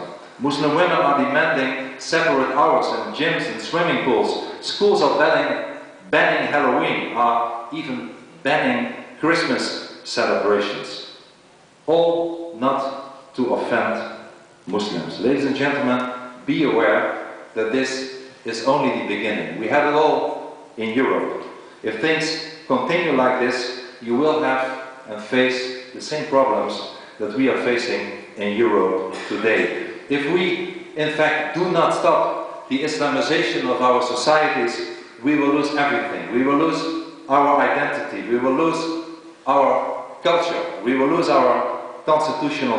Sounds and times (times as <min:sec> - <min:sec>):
Male speech, man speaking: 0:00.0 - 0:11.1, 0:11.9 - 0:42.7.